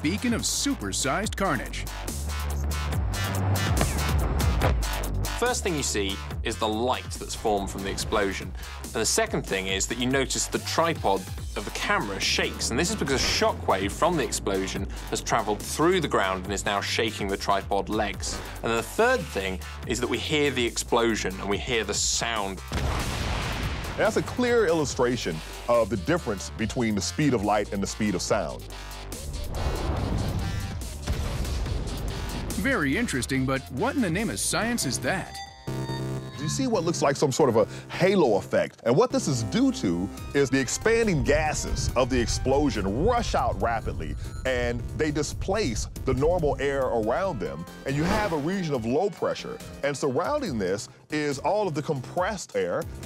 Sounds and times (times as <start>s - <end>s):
Speech: 0.0s - 1.9s, 5.4s - 22.6s, 24.0s - 28.6s, 32.5s - 35.4s, 36.4s - 52.9s
Music: 0.0s - 53.0s.